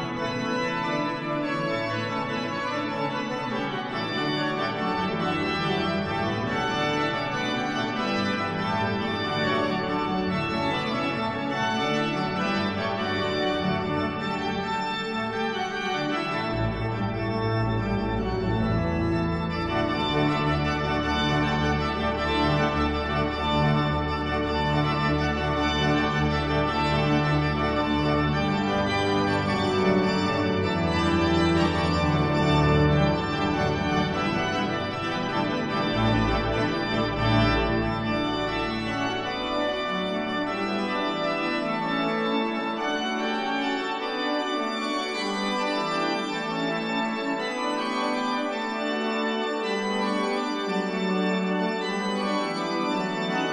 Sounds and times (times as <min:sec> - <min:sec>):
Hammond organ: 0:00.0 - 0:53.5.